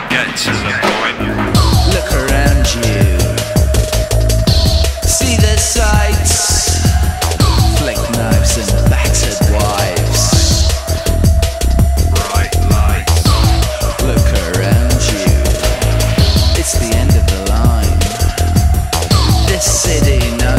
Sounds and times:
Speech: 0.0 - 3.5, 5.1 - 10.6, 12.2 - 13.2, 13.9 - 15.6, 16.2 - 18.2
Music: 0.2 - 20.5.

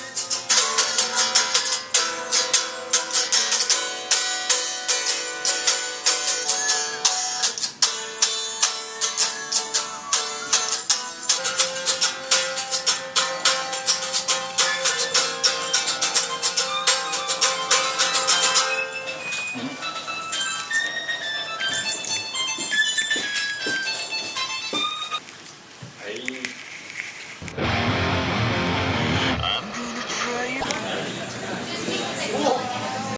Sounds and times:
Musical instrument: 8.7 - 25.2
Speech: 26.0 - 26.6, 29.4 - 33.1.

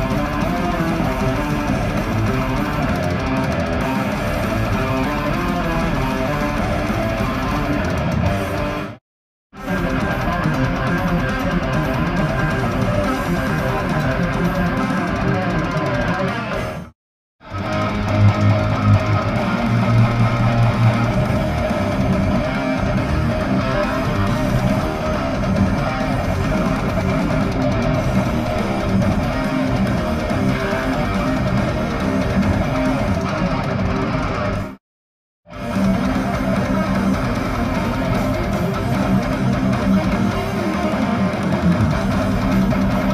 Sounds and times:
Electric guitar: 0.0 - 9.0, 9.6 - 34.8, 35.5 - 43.1.

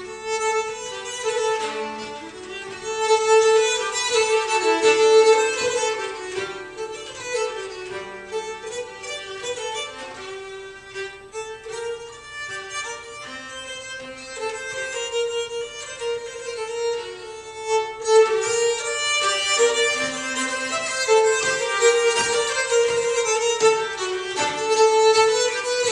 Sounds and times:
Bowed string instrument: 0.0 - 25.9
Classical music: 0.0 - 25.9.

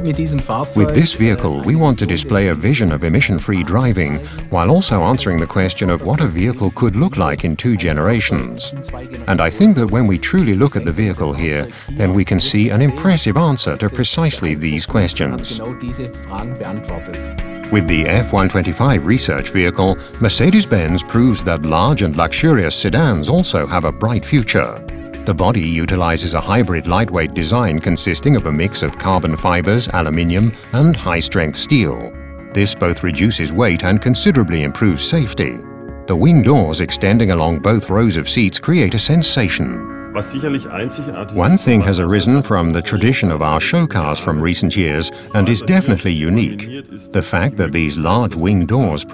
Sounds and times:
Music: 0.0 - 49.1
Speech: 0.0 - 49.1.

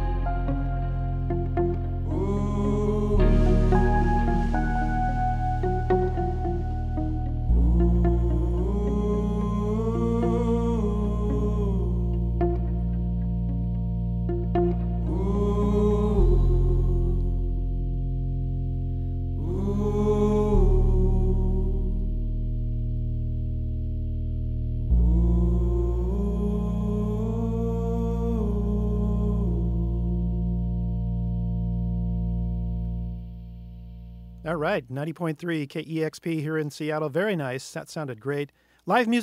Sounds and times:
Music: 0.0 - 34.8
Speech: 34.4 - 39.2.

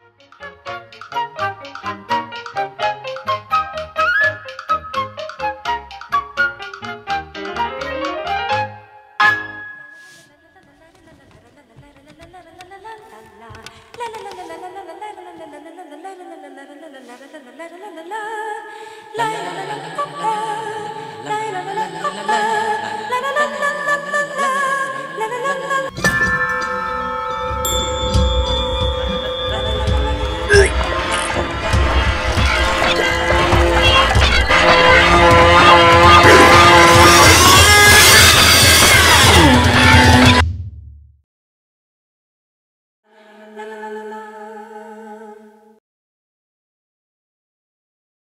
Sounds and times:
Music: 0.0 - 10.4, 19.1 - 40.7.

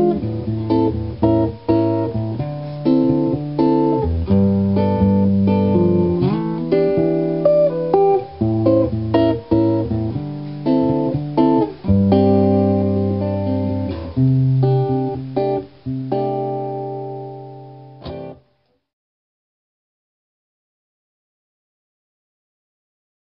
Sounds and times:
Music: 0.0 - 18.8.

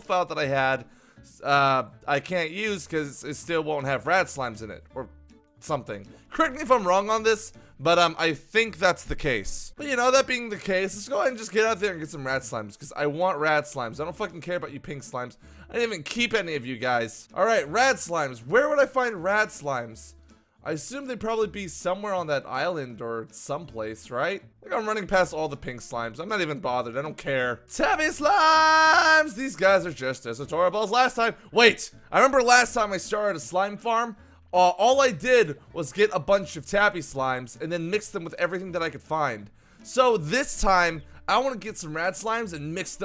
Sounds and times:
Speech: 0.0 - 43.0.

